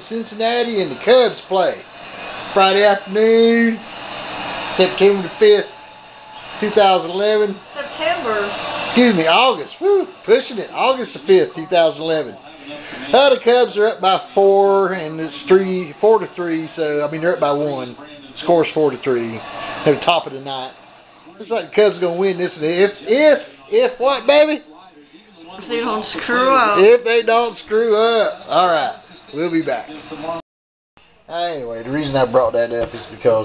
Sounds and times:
Speech: 0.0 - 1.8, 9.0 - 20.8, 21.4 - 30.4, 31.3 - 33.4.

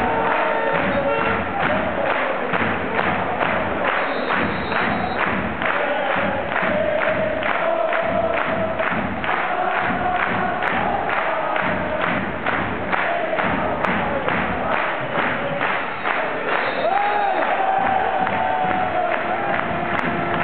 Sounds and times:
Male singing: 0.0 - 12.2, 12.9 - 19.6
Music: 0.0 - 20.4.

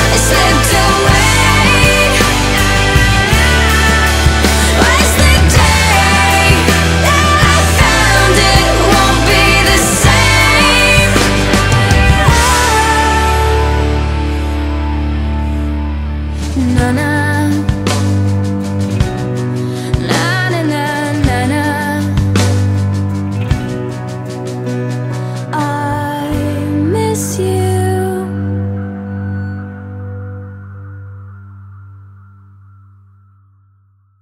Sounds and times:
Music: 0.0 - 34.2.

